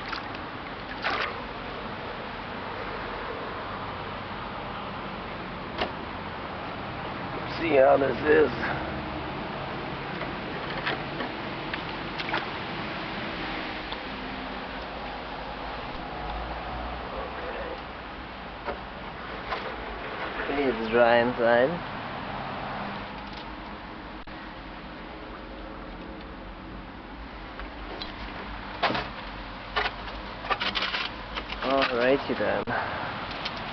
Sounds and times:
Boat, Water vehicle: 0:00.0 - 0:33.7.

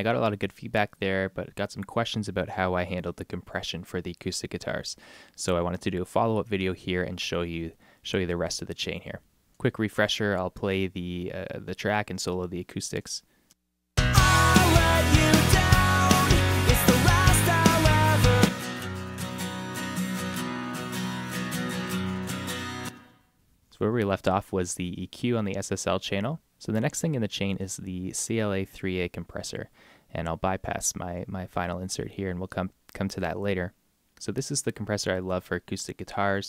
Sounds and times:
Speech: 0:00.0 - 0:13.3, 0:23.7 - 0:36.4
Guitar: 0:14.0 - 0:23.3.

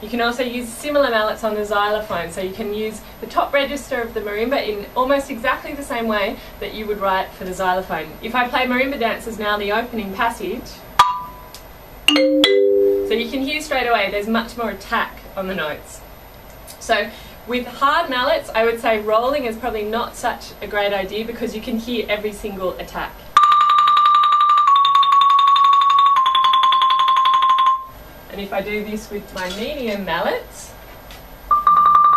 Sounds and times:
Marimba, xylophone: 0:11.0 - 0:11.5, 0:12.1 - 0:13.3, 0:23.4 - 0:27.9
Glockenspiel: 0:12.1 - 0:13.3, 0:23.4 - 0:27.9.

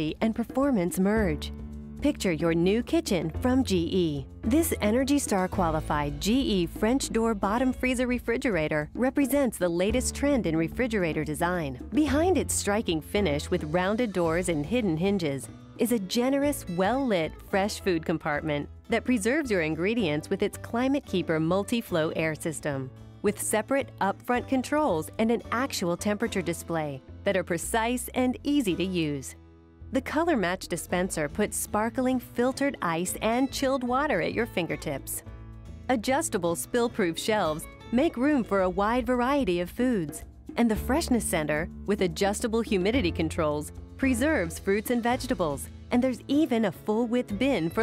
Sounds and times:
Speech: 0:00.0 - 0:29.4, 0:30.0 - 0:35.2, 0:35.9 - 0:47.8.

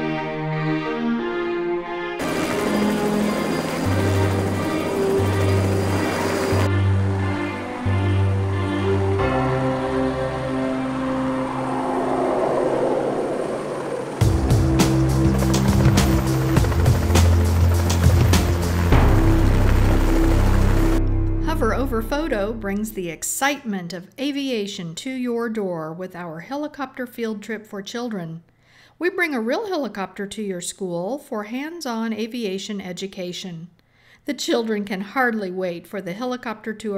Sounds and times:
Speech: 0:21.4 - 0:28.4, 0:29.0 - 0:33.7, 0:34.3 - 0:36.9.

